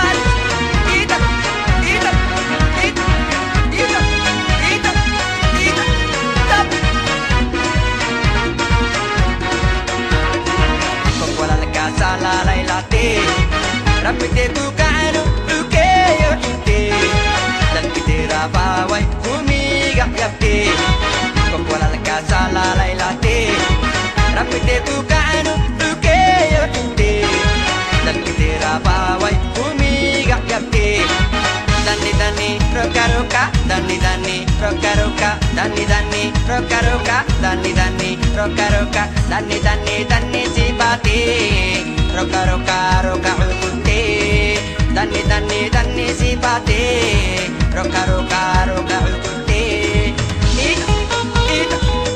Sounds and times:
Dance music: 0.0s - 52.1s.

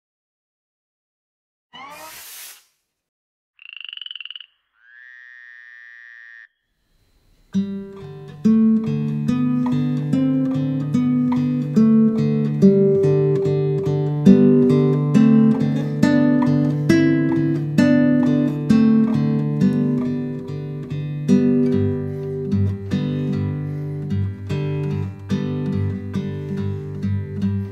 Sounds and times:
Acoustic guitar: 7.5s - 27.7s.

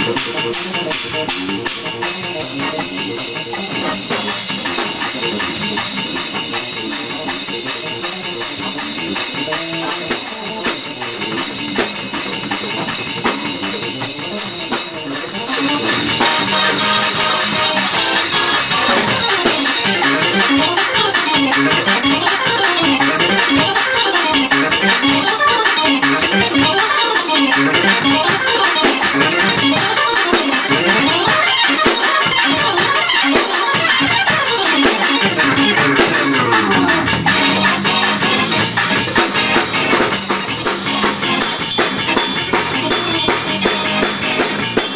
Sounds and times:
Music: 0.0s - 44.9s.

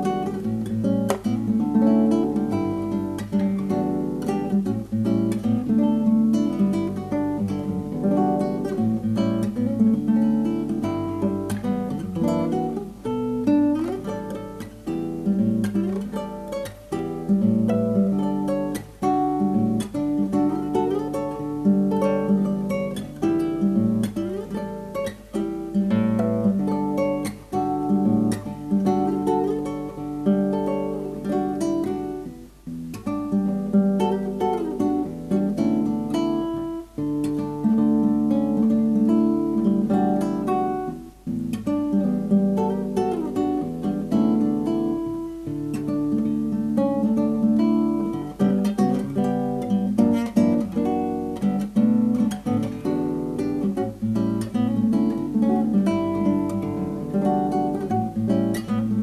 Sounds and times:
Acoustic guitar: 0.0s - 59.0s.

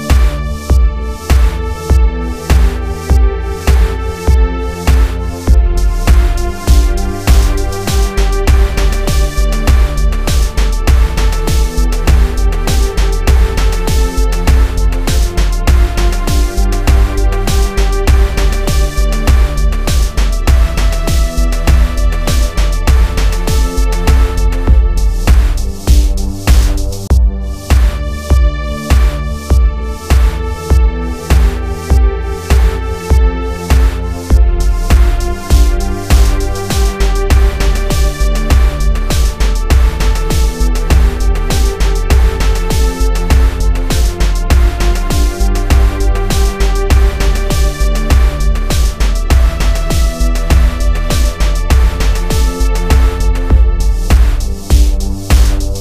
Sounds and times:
Music: 0.0s - 55.8s.

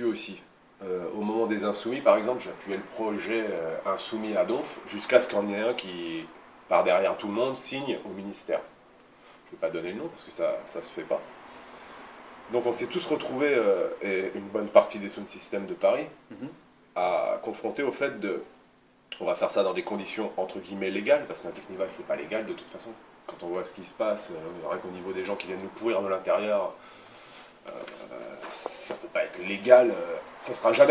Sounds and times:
Speech: 0.0s - 8.7s, 9.5s - 11.3s, 12.5s - 18.6s, 19.2s - 26.8s, 27.6s - 30.9s.

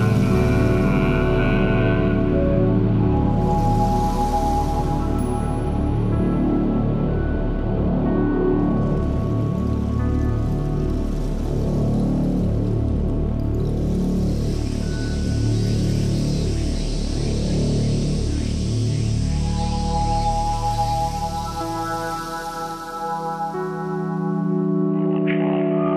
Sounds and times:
Ambient music: 0.0s - 25.9s.

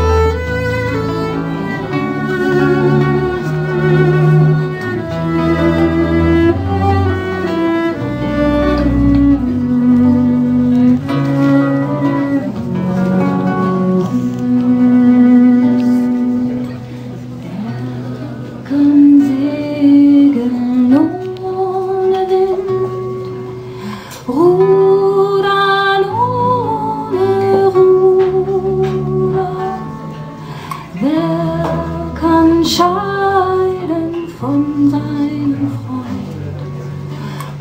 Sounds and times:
Music: 0.0s - 37.6s.

